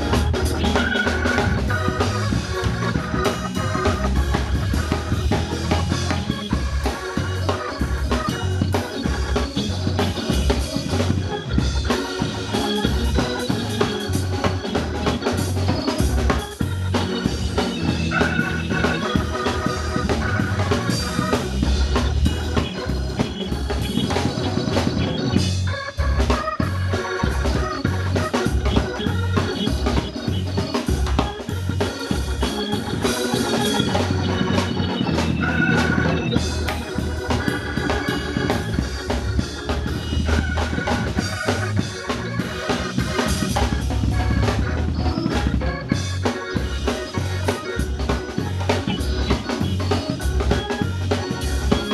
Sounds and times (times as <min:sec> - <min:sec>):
Music: 0:00.0 - 0:51.9.